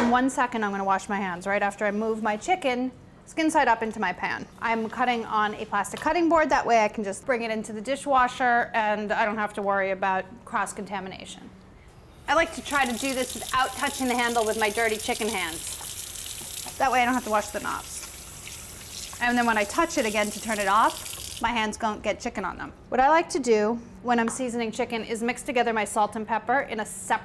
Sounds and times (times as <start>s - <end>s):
Speech: 0.0s - 11.5s, 19.2s - 27.2s.